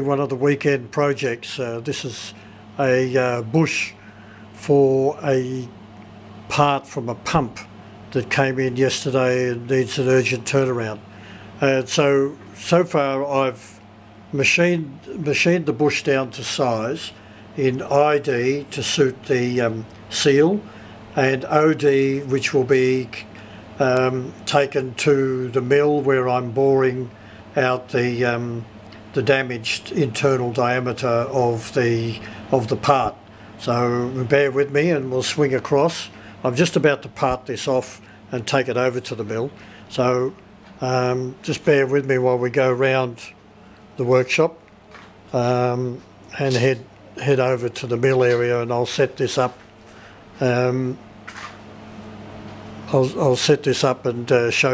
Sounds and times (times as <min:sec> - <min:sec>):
Speech: 0:00.0 - 0:04.0, 0:04.6 - 0:05.8, 0:06.5 - 0:43.4, 0:44.0 - 0:44.6, 0:45.3 - 0:49.6, 0:50.4 - 0:51.0, 0:52.8 - 0:54.7.